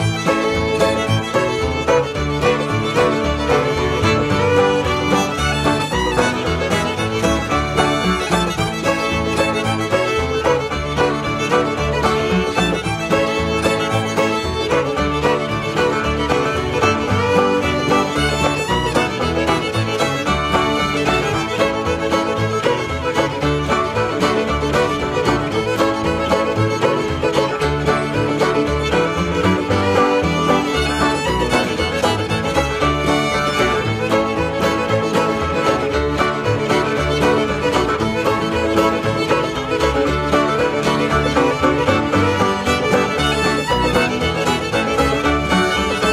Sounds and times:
Music: 0:00.0 - 0:46.1.

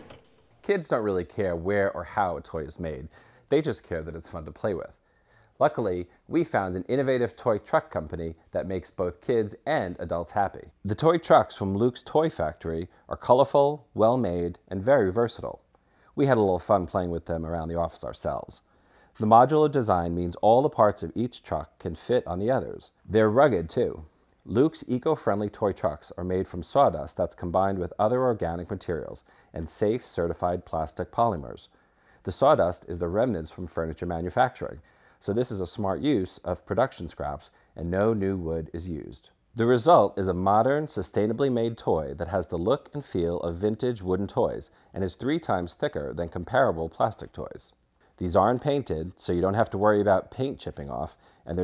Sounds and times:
Speech: 0:00.0 - 0:51.6.

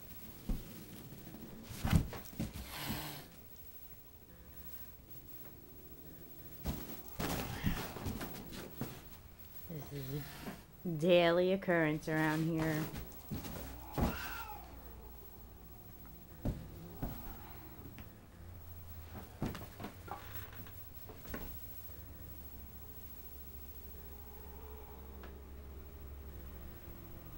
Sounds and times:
Speech: 0:09.7 - 0:13.0.

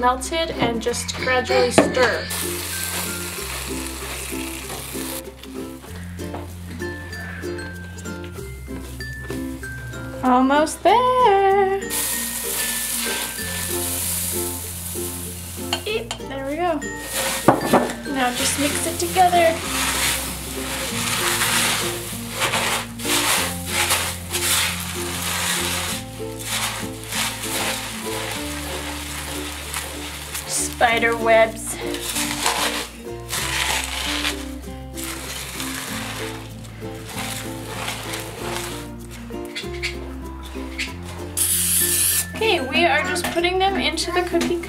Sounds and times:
Speech: 0:00.0 - 0:02.3, 0:18.1 - 0:19.6, 0:30.5 - 0:31.8, 0:42.4 - 0:44.6
Music: 0:00.0 - 0:44.6.

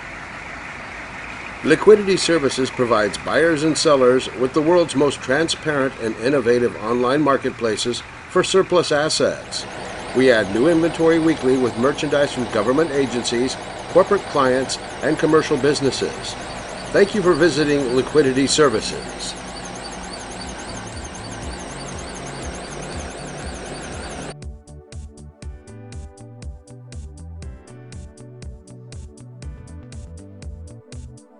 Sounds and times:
Vehicle: 0:00.0 - 0:24.4
Speech: 0:01.6 - 0:19.4.

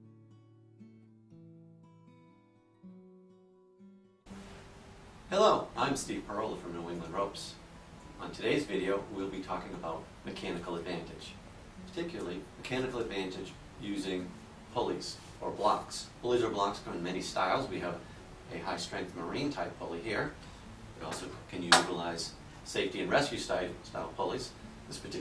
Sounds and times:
Speech: 0:05.3 - 0:07.6, 0:08.2 - 0:20.4, 0:21.0 - 0:25.2.

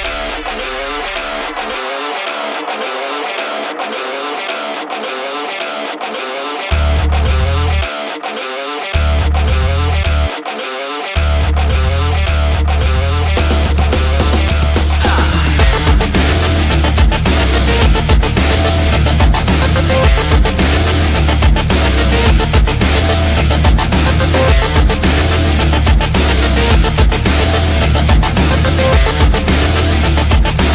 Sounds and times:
Rock music: 0:00.0 - 0:30.7.

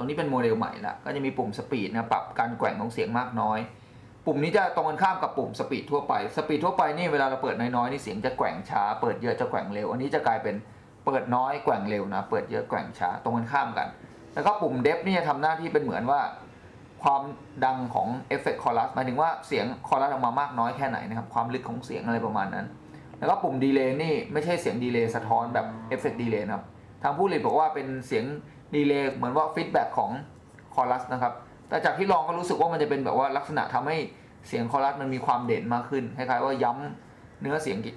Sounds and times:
Speech: 0:00.0 - 0:37.9.

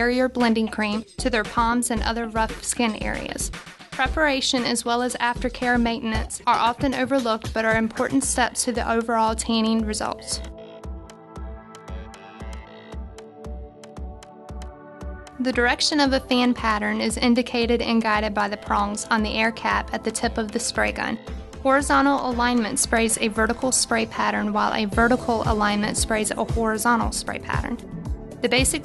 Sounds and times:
Speech: 0:00.0 - 0:10.5, 0:15.4 - 0:27.8, 0:28.5 - 0:28.8
Music: 0:00.0 - 0:28.8.

